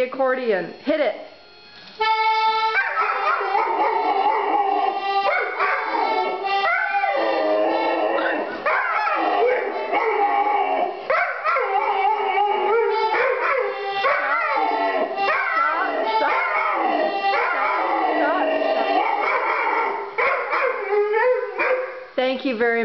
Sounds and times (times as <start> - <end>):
Speech: 0.0 - 1.3, 18.0 - 19.0, 22.2 - 22.8
Music: 0.0 - 22.8
Bow-wow: 2.8 - 4.4, 15.3 - 18.0, 18.8 - 22.0.